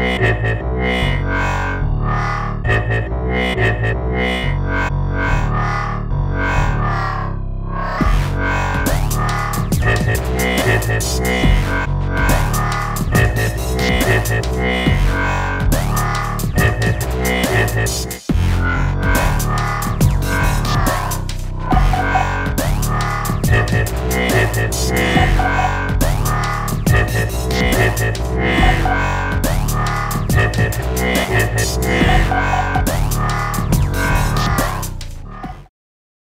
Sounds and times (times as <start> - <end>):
Dubstep: 0.0 - 35.7.